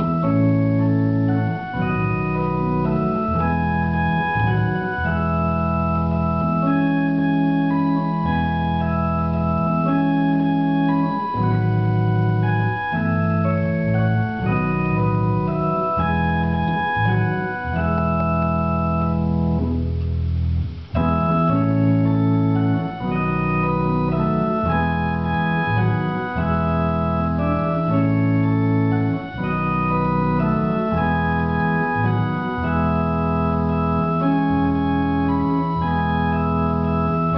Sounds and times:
Hammond organ: 0.0 - 37.3.

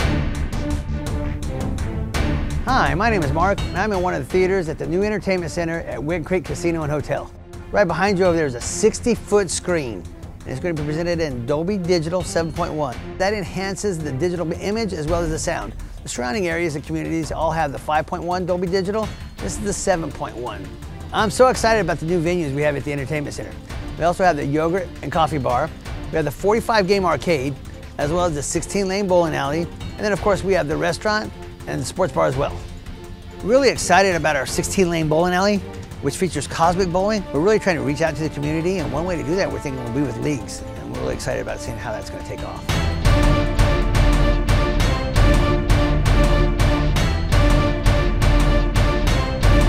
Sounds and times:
Music: 0.0 - 49.6
Speech: 2.7 - 32.6, 33.4 - 42.7.

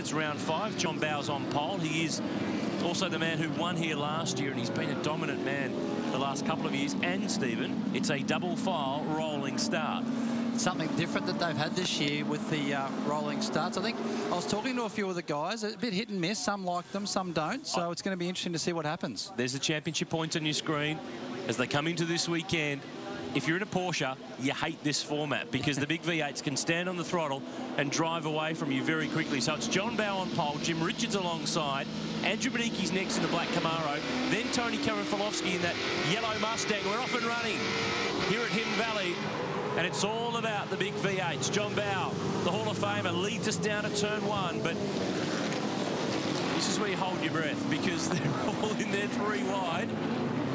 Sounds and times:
Speech: 0.0 - 2.2, 2.8 - 10.0, 10.6 - 37.6, 38.2 - 39.2, 39.8 - 44.8, 46.6 - 49.9.

